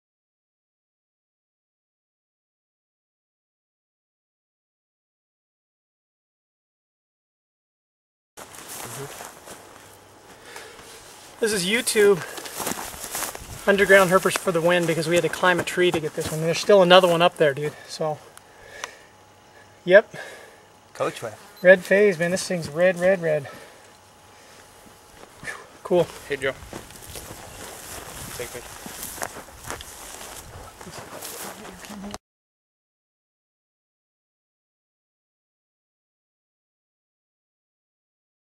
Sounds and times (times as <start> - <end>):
Outside, rural or natural: 8.4 - 32.2
Speech: 8.9 - 9.2, 11.4 - 12.3, 13.7 - 18.2, 19.9 - 20.2, 21.0 - 23.6, 25.8 - 26.6, 28.4 - 28.7.